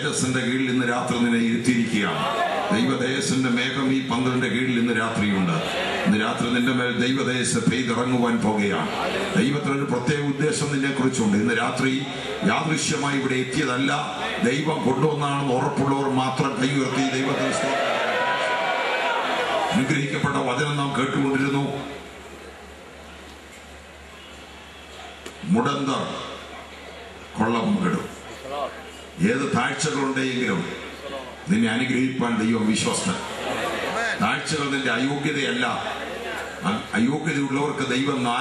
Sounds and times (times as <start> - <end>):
Speech: 0.0 - 17.7, 19.8 - 22.0, 25.4 - 33.3, 33.9 - 38.4.